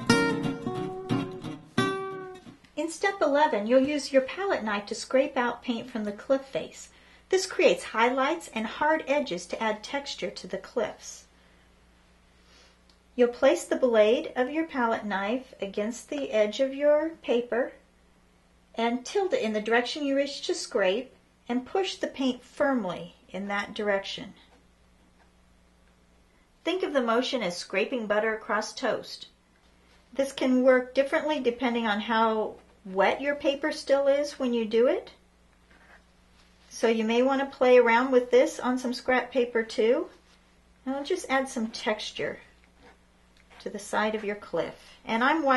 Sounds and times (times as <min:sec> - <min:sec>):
Speech: 0:02.8 - 0:11.3, 0:13.2 - 0:17.8, 0:18.8 - 0:24.5, 0:26.7 - 0:29.4, 0:30.1 - 0:35.2, 0:36.7 - 0:40.2, 0:40.8 - 0:42.5, 0:43.6 - 0:45.5.